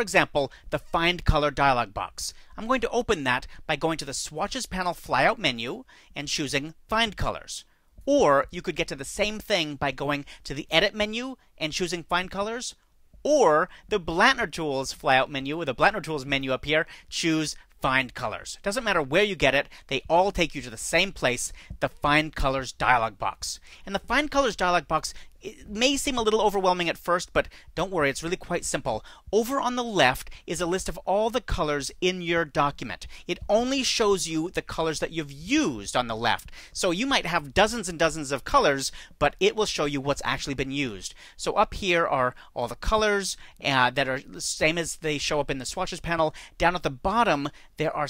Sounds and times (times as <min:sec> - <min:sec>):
Speech: 0:00.0 - 0:48.0.